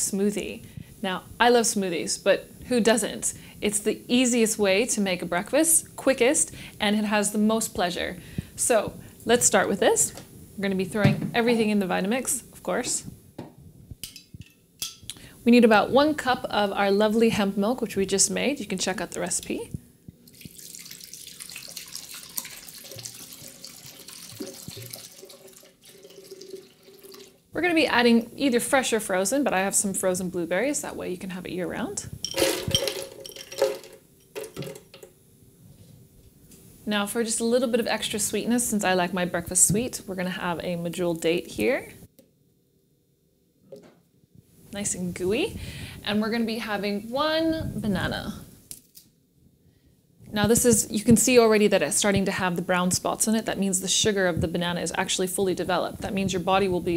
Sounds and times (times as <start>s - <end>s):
Speech: 0.0s - 13.1s, 15.4s - 19.8s, 27.6s - 32.2s, 36.8s - 42.0s, 44.7s - 48.5s, 50.3s - 56.9s.